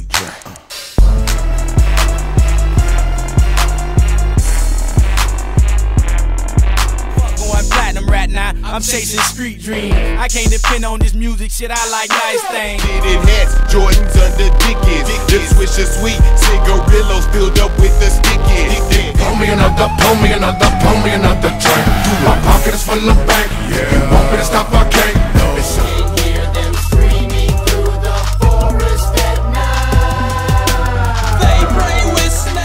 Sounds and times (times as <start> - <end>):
Music: 0.0 - 32.6.